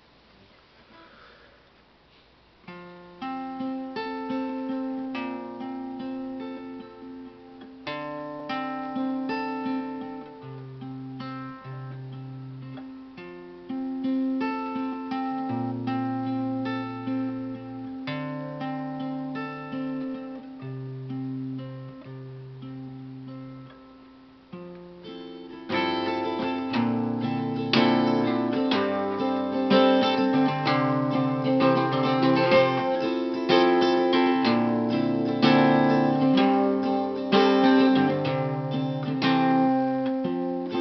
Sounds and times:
Acoustic guitar: 0:00.0 - 0:40.8.

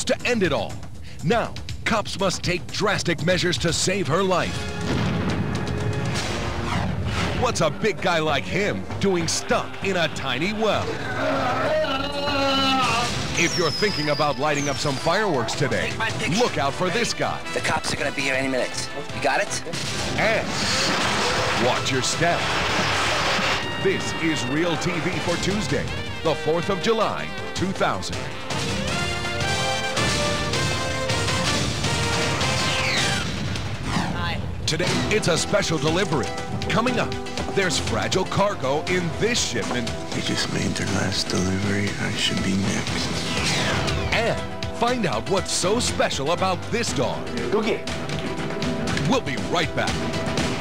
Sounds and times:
Music: 0:00.0 - 0:50.6.

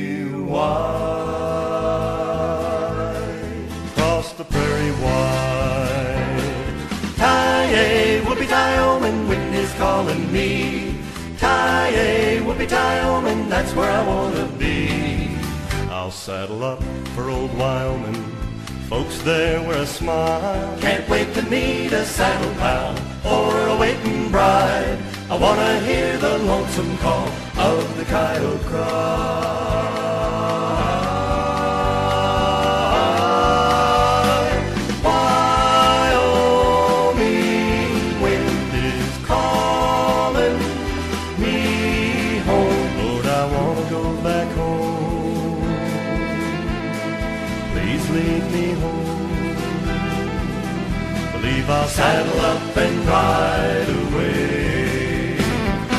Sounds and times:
Music: 0:00.0 - 0:55.9.

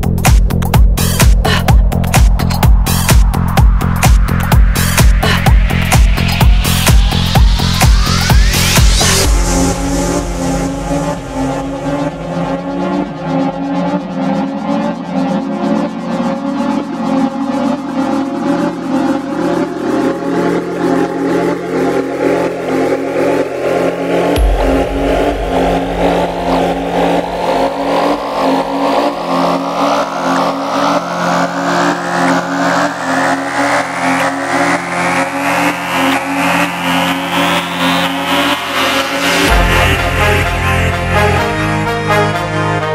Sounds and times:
Music: 0:00.0 - 0:42.9.

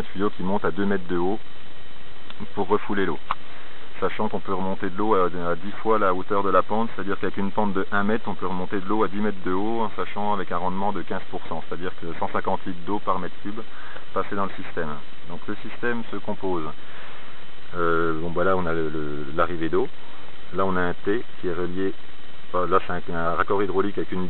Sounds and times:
Speech: 0:00.0 - 0:01.4, 0:02.3 - 0:03.4, 0:04.0 - 0:16.8, 0:17.7 - 0:24.2.

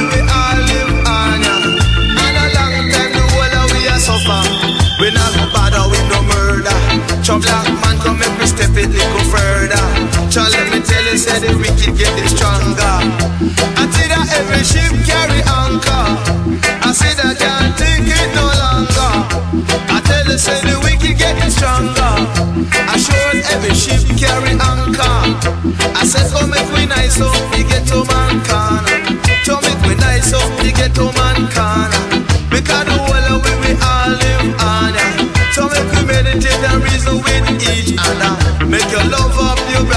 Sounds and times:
Music of Africa: 0:00.0 - 0:39.9.

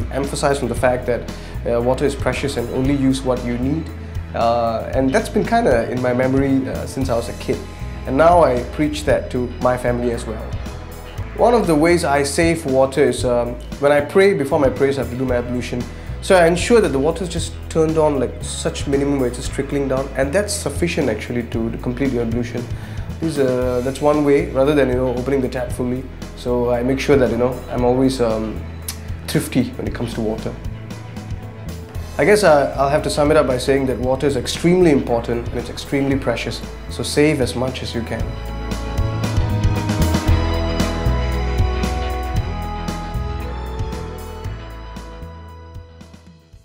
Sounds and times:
Speech: 0:00.0 - 0:10.6, 0:11.4 - 0:28.6, 0:29.3 - 0:30.6, 0:32.2 - 0:38.3
Music: 0:00.0 - 0:46.6.

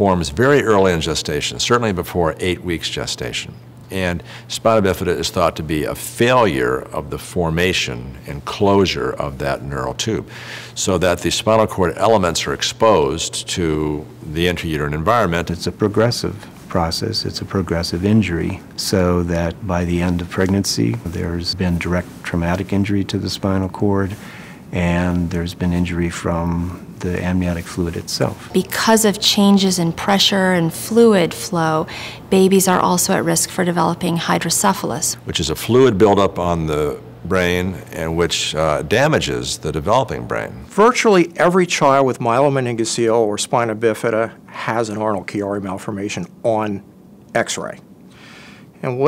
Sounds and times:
Speech: 0:00.0 - 0:46.8, 0:47.4 - 0:47.8, 0:48.8 - 0:49.0.

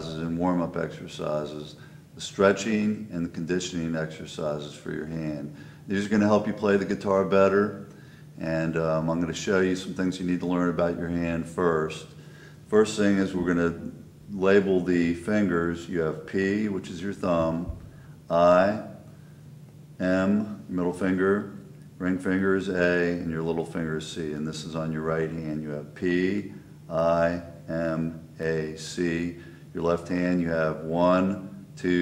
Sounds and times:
Speech: 0:00.0 - 0:19.0, 0:20.0 - 0:32.0.

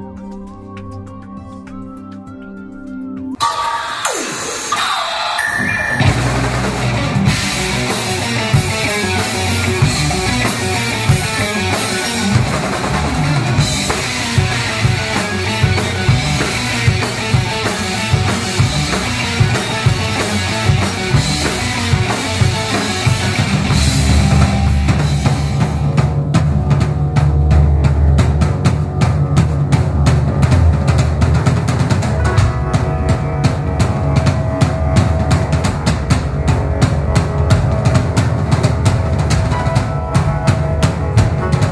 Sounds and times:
Progressive rock: 0:00.0 - 0:41.7.

